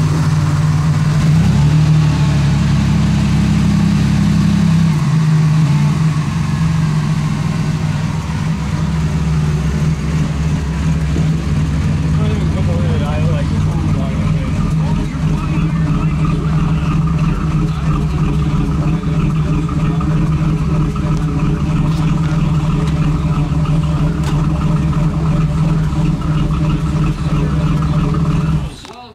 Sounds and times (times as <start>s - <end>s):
Speech: 12.2s - 20.3s, 28.6s - 29.1s.